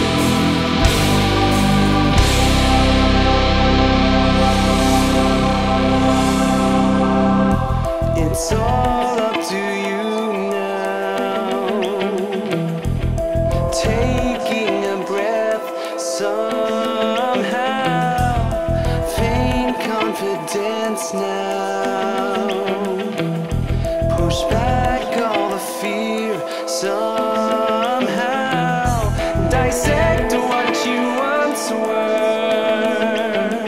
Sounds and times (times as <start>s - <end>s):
Music: 0.0s - 33.6s.